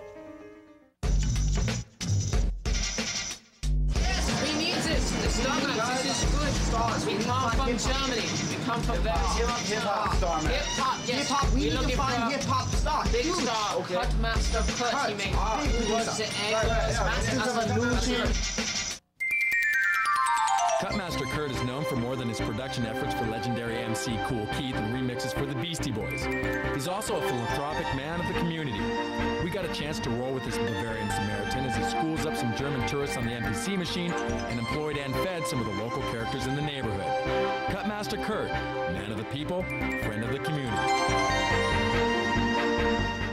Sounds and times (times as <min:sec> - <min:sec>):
Music: 0:00.0 - 0:43.3
Speech: 0:04.0 - 0:18.4, 0:20.8 - 0:26.2, 0:26.8 - 0:37.1, 0:37.7 - 0:40.9.